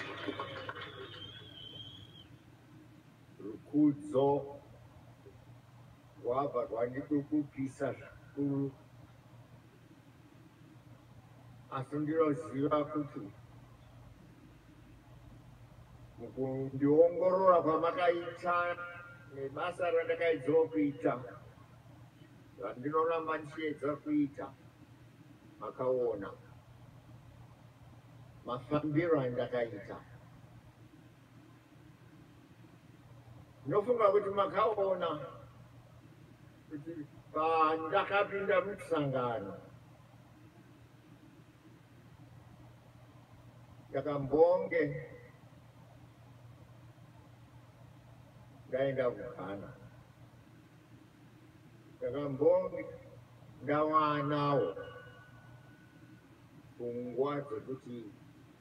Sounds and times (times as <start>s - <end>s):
Male speech, man speaking: 3.4s - 4.6s, 6.2s - 8.8s, 11.7s - 13.4s, 16.2s - 21.5s, 22.6s - 24.6s, 25.6s - 26.5s, 28.5s - 30.1s, 33.7s - 35.5s, 36.7s - 39.7s, 43.9s - 45.3s, 48.7s - 49.9s, 52.0s - 55.0s, 56.8s - 58.2s.